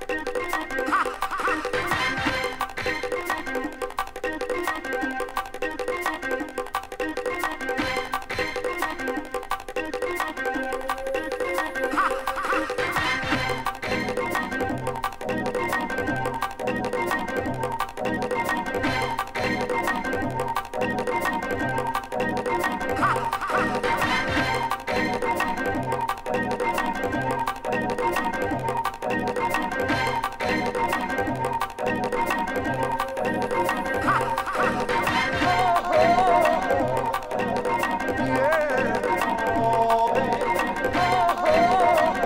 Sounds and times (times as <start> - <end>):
Musical instrument: 7.2 - 42.2.